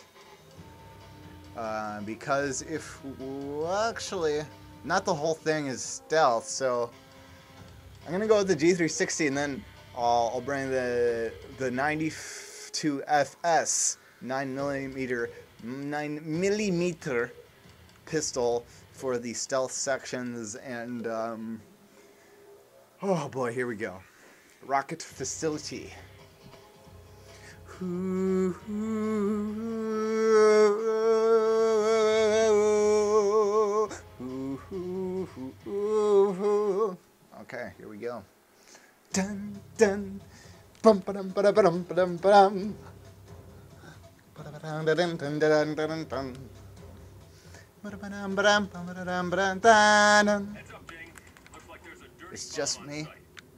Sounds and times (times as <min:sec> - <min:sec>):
Speech: 0:01.6 - 0:06.9, 0:08.1 - 0:17.3, 0:18.1 - 0:21.6, 0:23.0 - 0:26.0, 0:37.3 - 0:38.3, 0:47.8 - 0:53.2.